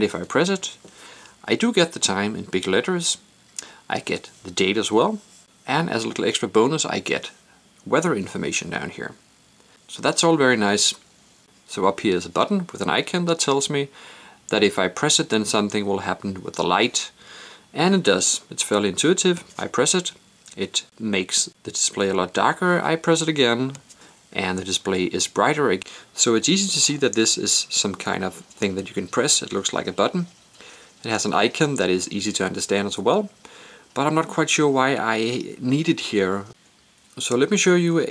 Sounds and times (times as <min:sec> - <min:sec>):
Speech: 0:00.0 - 0:00.8, 0:01.4 - 0:03.3, 0:03.9 - 0:09.2, 0:09.9 - 0:11.0, 0:11.7 - 0:30.4, 0:31.0 - 0:33.4, 0:34.0 - 0:36.6, 0:37.2 - 0:38.1.